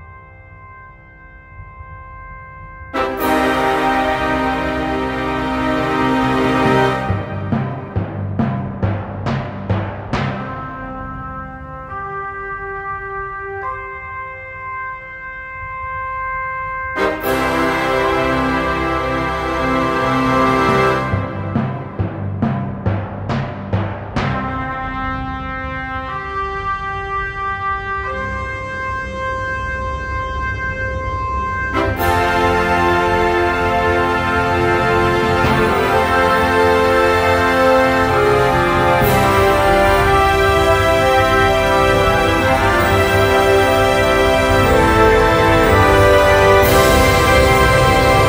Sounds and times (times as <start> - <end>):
Timpani: 2.9 - 48.2.